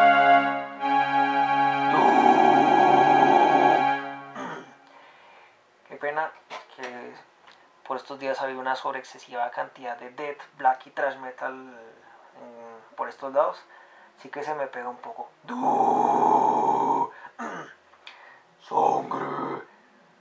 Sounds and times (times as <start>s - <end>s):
Speech: 5.9s - 17.8s, 18.6s - 19.7s.